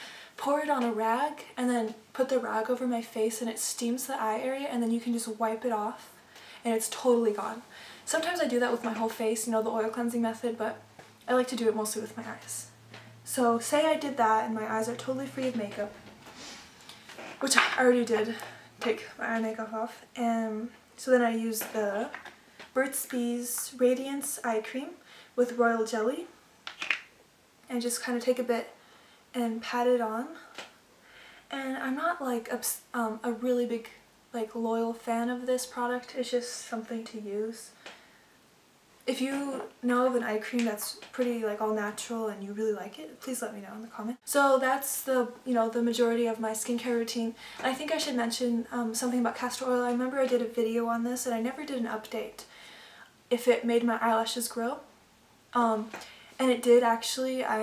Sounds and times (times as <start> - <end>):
Inside, small room: 0.0 - 57.6
Speech: 0.4 - 16.0, 17.4 - 22.2, 22.8 - 26.4, 27.7 - 28.8, 29.4 - 30.5, 31.5 - 37.8, 39.1 - 52.5, 53.3 - 54.9, 55.6 - 57.6.